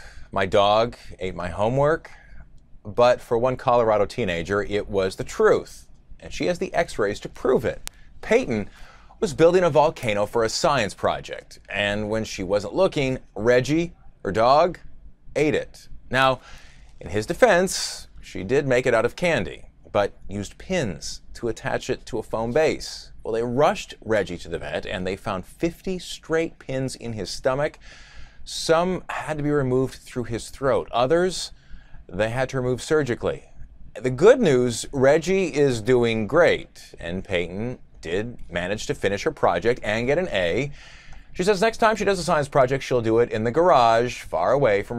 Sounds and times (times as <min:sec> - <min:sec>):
Speech: 0:00.0 - 0:40.8, 0:41.4 - 0:44.9.